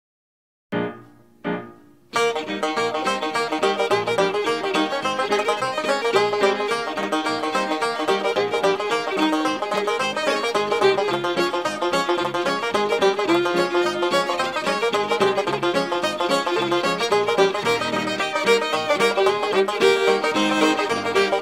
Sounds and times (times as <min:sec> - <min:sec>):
Banjo: 0:02.2 - 0:21.4.